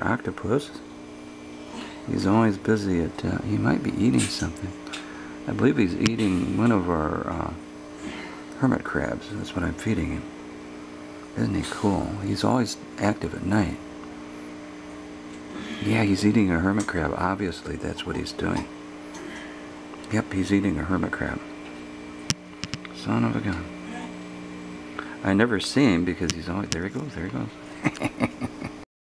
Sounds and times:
Speech: 0.0 - 0.8, 2.1 - 4.8, 5.5 - 7.6, 8.6 - 10.3, 11.4 - 13.8, 15.6 - 18.7, 20.1 - 21.5, 23.0 - 24.1, 25.2 - 27.6.

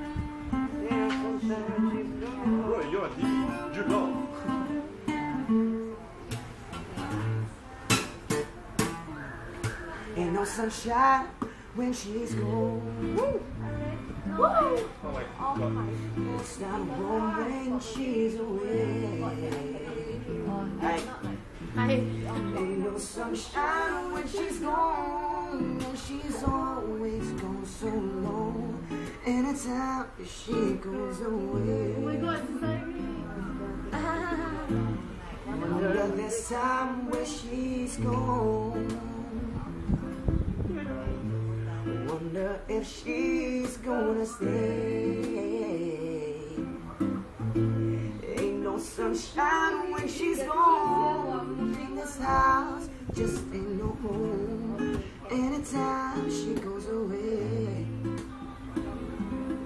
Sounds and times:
Male singing: 0.0 - 4.9, 10.1 - 39.8, 40.8 - 58.8
Music: 0.0 - 59.6
Speech: 13.3 - 24.7, 30.4 - 43.1.

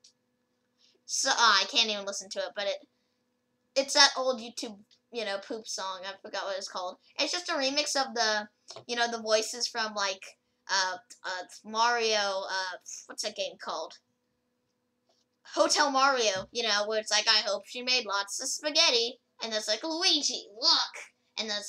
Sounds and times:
Inside, small room: 0.0 - 21.6
Speech: 1.1 - 2.8, 3.8 - 14.0, 15.5 - 21.6.

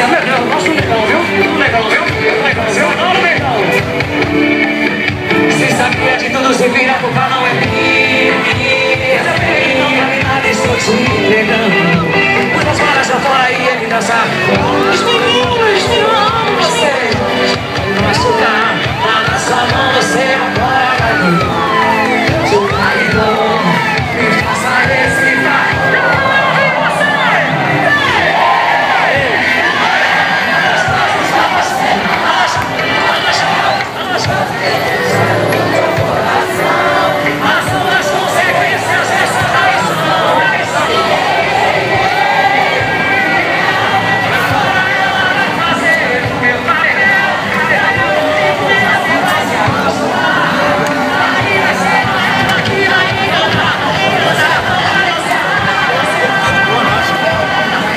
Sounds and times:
Speech: 0.0 - 3.9, 9.3 - 21.6, 22.4 - 41.4, 51.2 - 57.9
Crowd: 0.0 - 57.9
Music: 0.0 - 57.9.

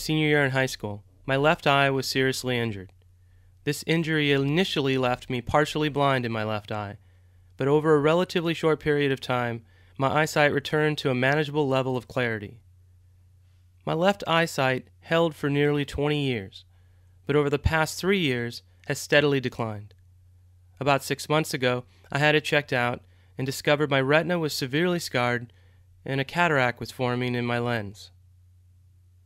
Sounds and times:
Speech: 0.0 - 2.9, 3.6 - 7.0, 7.6 - 12.6, 13.8 - 16.6, 17.3 - 20.0, 20.8 - 28.2.

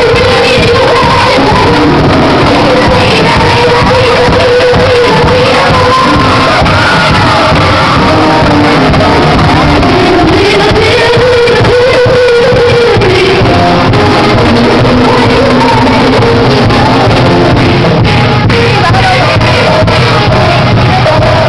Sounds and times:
Music: 0.0 - 21.4.

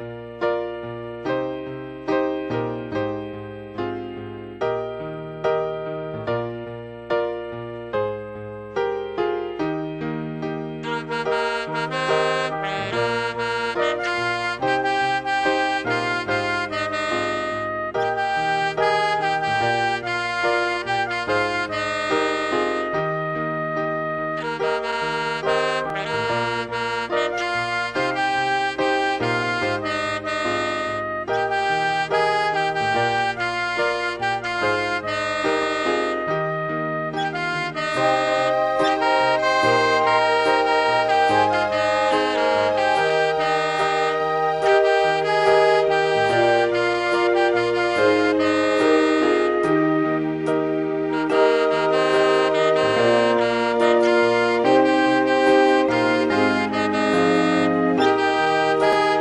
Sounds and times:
Inside, small room: 0.0 - 59.2
Saxophone: 10.7 - 59.2.

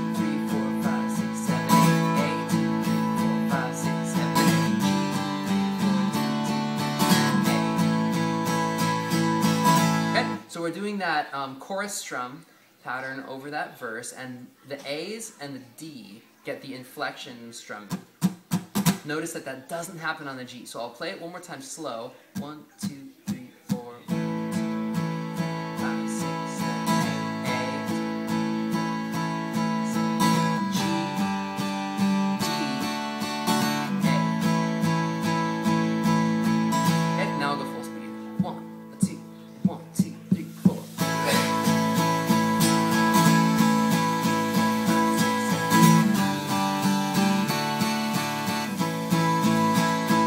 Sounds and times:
Guitar: 0.0 - 11.8, 12.9 - 21.4, 22.2 - 50.2
Speech: 10.2 - 18.0, 19.0 - 24.2, 25.8 - 28.0, 32.4 - 32.9, 37.2 - 41.4.

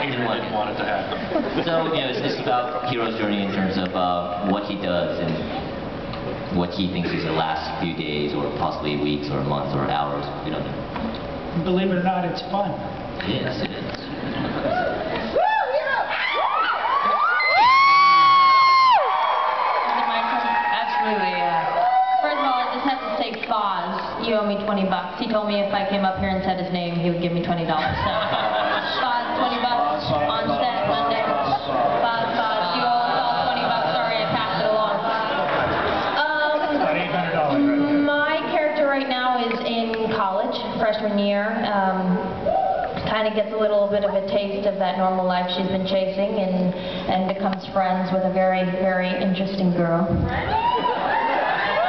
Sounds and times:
Cheering: 14.6 - 23.4, 50.3 - 51.8.

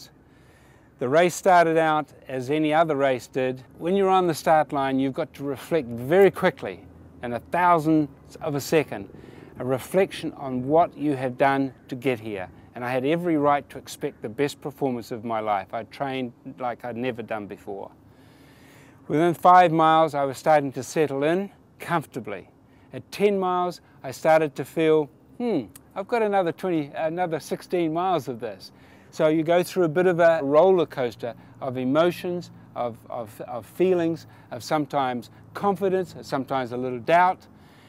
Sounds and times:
Outside, urban or manmade: 0.0 - 37.8
Speech: 1.0 - 18.0, 19.1 - 37.5.

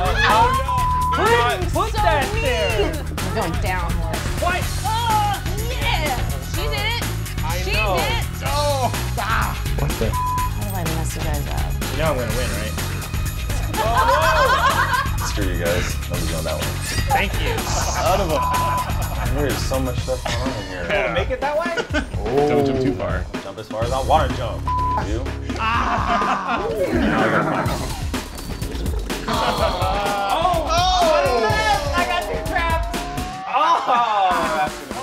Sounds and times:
Music: 0.0 - 35.0.

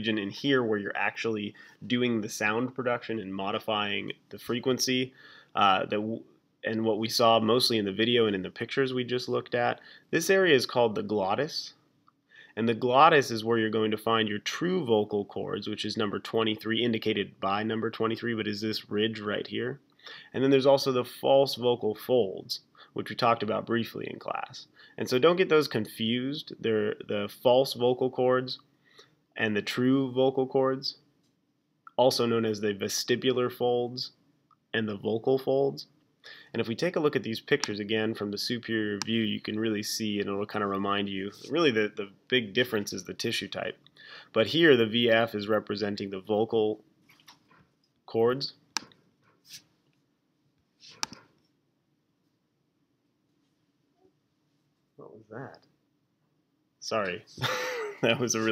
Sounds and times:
Speech: 0.0 - 11.8, 12.6 - 28.6, 29.4 - 31.0, 31.9 - 34.2, 34.8 - 46.8, 48.1 - 48.6, 55.0 - 55.6, 56.8 - 57.4, 58.0 - 58.5.

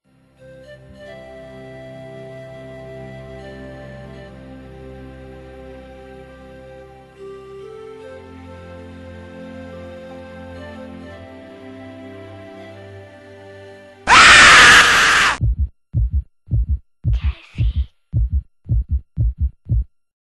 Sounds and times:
Heart murmur: 15.4 - 19.9.

